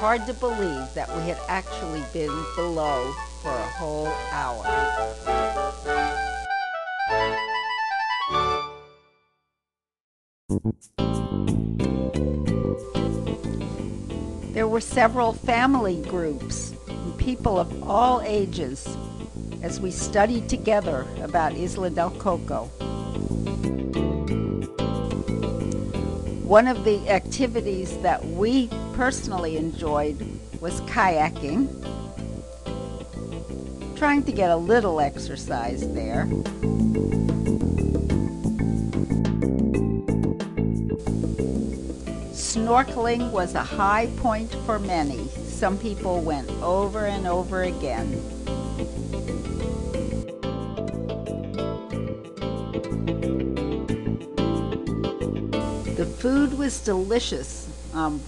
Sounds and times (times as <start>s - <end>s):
Speech: 0.0s - 4.8s, 14.6s - 19.0s, 19.6s - 22.7s, 26.5s - 31.7s, 34.0s - 36.3s, 42.4s - 48.2s, 56.0s - 58.2s
Music: 0.0s - 9.6s, 10.5s - 58.2s.